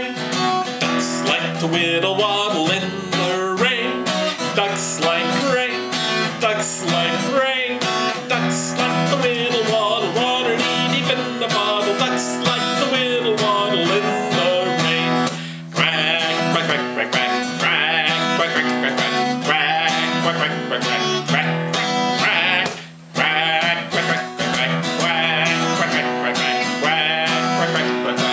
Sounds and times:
Music: 0.0s - 28.3s.

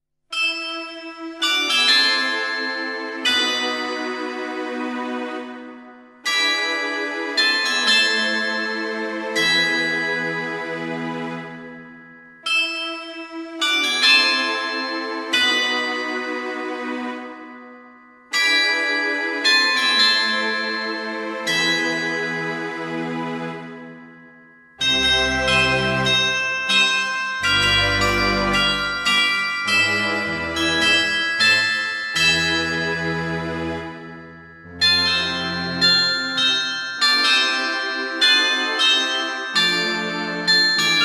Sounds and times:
Music: 0.3s - 41.0s.

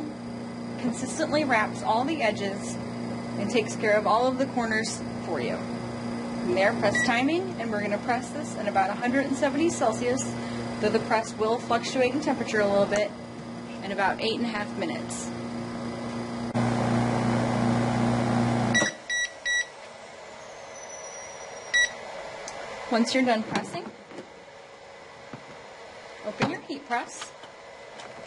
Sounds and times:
Speech: 0.8s - 2.8s, 3.4s - 5.7s, 6.4s - 13.1s, 13.7s - 15.3s, 22.9s - 23.9s, 26.2s - 27.4s
Beep, bleep: 18.7s - 19.7s, 21.7s - 22.0s.

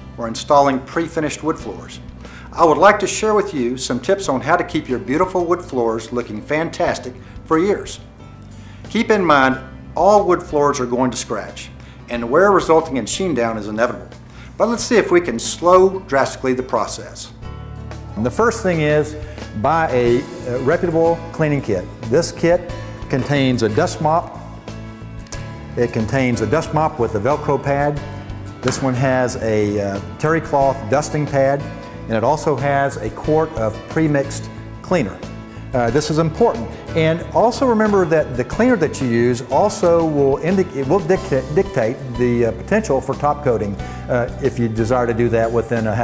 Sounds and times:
Music: 0.0s - 46.0s
Speech: 0.2s - 2.0s, 2.6s - 8.0s, 8.9s - 17.4s, 18.2s - 24.4s, 25.8s - 28.0s, 28.6s - 46.0s.

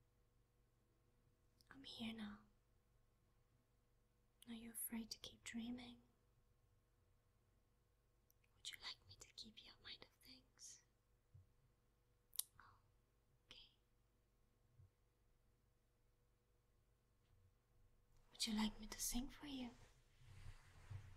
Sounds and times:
Whispering: 1.6s - 2.6s, 4.4s - 6.1s, 8.5s - 10.9s, 12.4s - 12.9s, 13.5s - 13.9s, 18.3s - 20.0s
Speech: 1.7s - 2.5s, 18.4s - 19.8s.

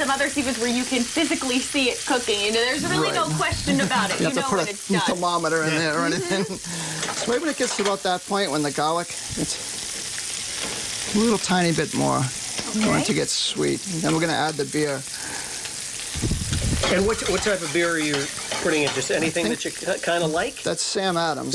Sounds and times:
Frying (food): 0.0s - 21.5s
Sizzle: 0.0s - 21.5s.

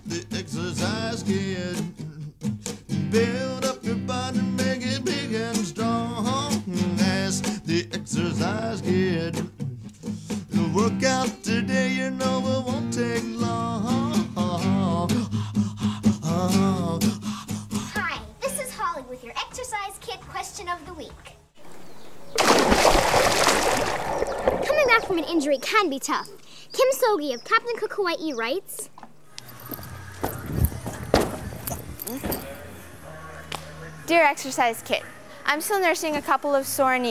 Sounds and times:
Speech: 24.6s - 28.9s, 32.2s - 37.1s.

